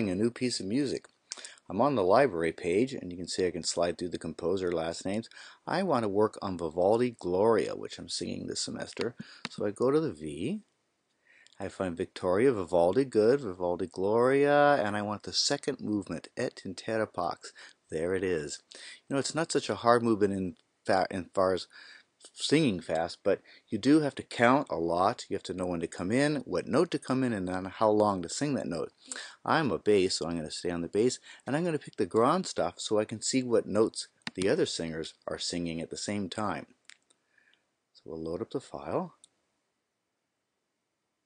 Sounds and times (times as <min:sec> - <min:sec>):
Speech: 0:00.0 - 0:10.7, 0:11.6 - 0:36.8, 0:38.0 - 0:39.3.